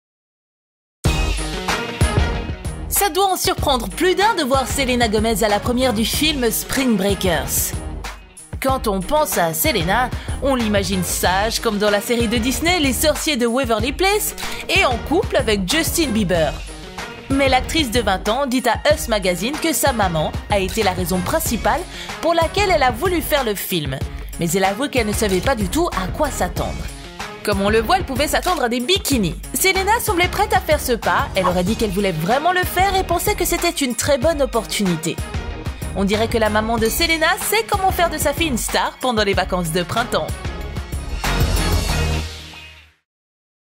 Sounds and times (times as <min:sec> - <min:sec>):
Music: 0:01.0 - 0:43.1
Speech: 0:02.9 - 0:07.7, 0:08.6 - 0:16.6, 0:17.3 - 0:35.2, 0:35.9 - 0:40.4.